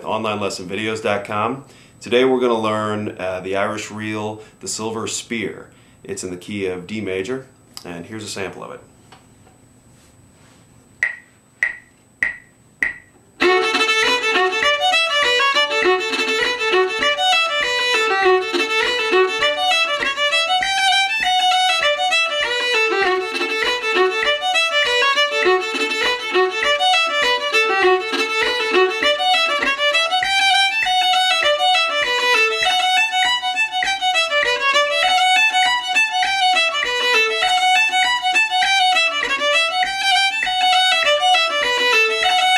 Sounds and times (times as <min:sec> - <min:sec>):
Violin, fiddle: 0:13.4 - 0:42.5.